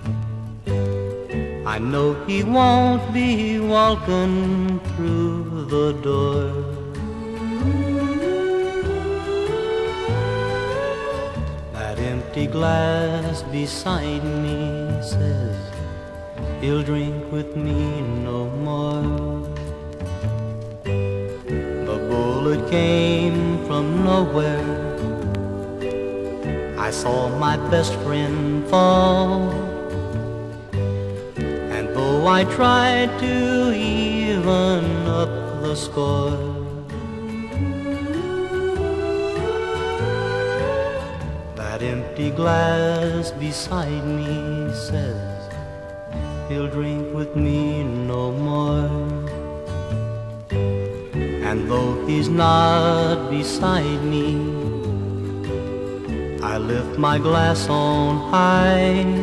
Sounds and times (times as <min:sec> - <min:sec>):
Music: 0:00.0 - 0:59.2.